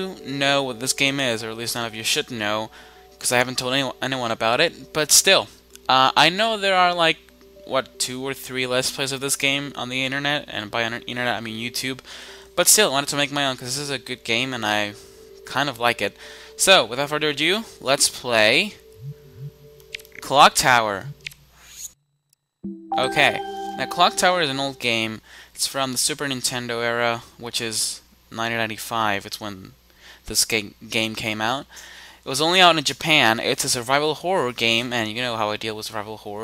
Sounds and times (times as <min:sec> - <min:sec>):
Speech: 0:00.0 - 0:18.8, 0:20.2 - 0:21.1, 0:23.0 - 0:31.7, 0:32.3 - 0:36.4.